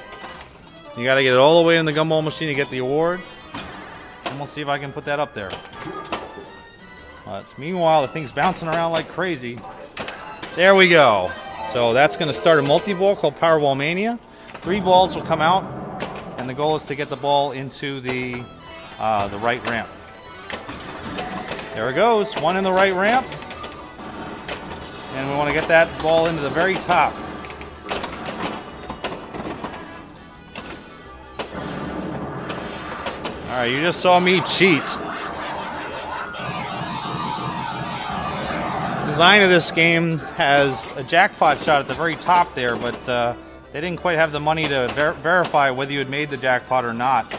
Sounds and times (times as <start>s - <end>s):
Music: 0.0s - 47.3s
Speech: 1.0s - 3.2s, 7.3s - 9.6s, 10.6s - 15.6s, 16.4s - 18.4s, 19.0s - 19.9s, 21.8s - 23.3s, 25.2s - 27.2s, 33.5s - 35.0s, 39.1s - 47.3s.